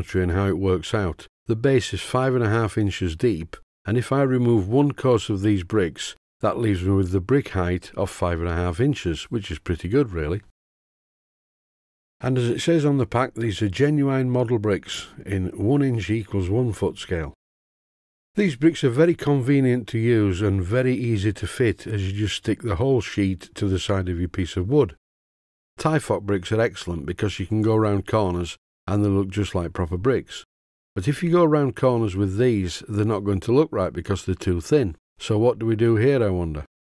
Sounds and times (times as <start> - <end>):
Speech: 0.0 - 10.5, 12.2 - 17.4, 18.4 - 25.0, 25.8 - 36.7.